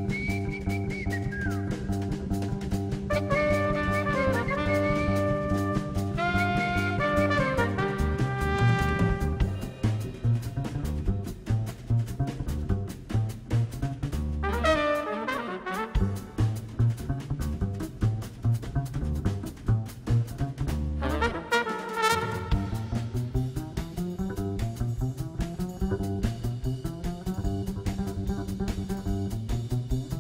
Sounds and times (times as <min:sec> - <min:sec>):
Music: 0:00.0 - 0:30.2.